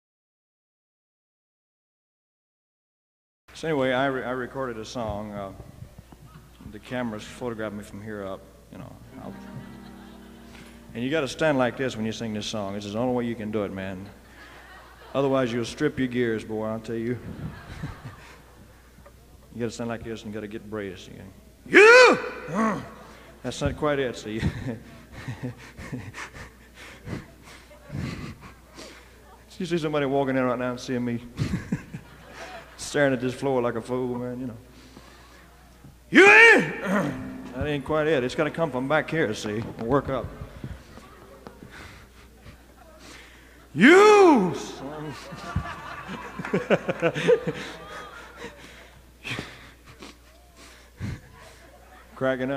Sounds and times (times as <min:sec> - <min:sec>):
Speech: 0:03.6 - 0:05.6, 0:06.3 - 0:09.6, 0:10.9 - 0:14.2, 0:15.1 - 0:17.2, 0:19.5 - 0:24.8, 0:29.2 - 0:31.3, 0:32.8 - 0:34.6, 0:36.1 - 0:41.6, 0:51.8 - 0:52.5.